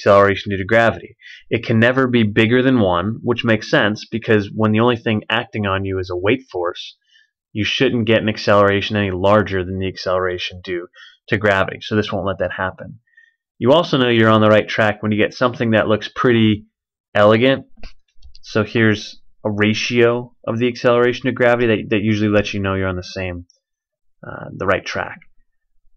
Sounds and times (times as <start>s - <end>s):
Speech: 0.0s - 17.8s, 18.4s - 23.5s, 24.2s - 25.3s.